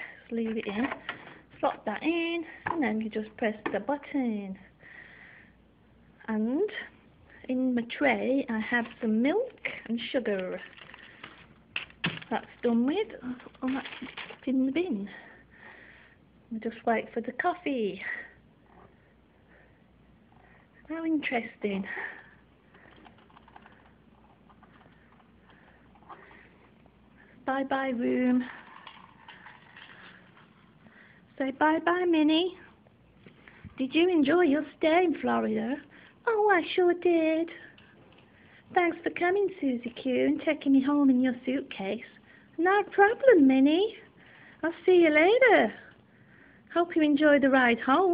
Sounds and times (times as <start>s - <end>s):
Speech: 0.3s - 4.7s, 6.2s - 10.7s, 12.2s - 15.4s, 16.5s - 18.4s, 20.8s - 22.3s, 27.4s - 28.6s, 31.4s - 32.7s, 33.8s - 37.8s, 38.7s - 46.0s, 46.7s - 48.1s.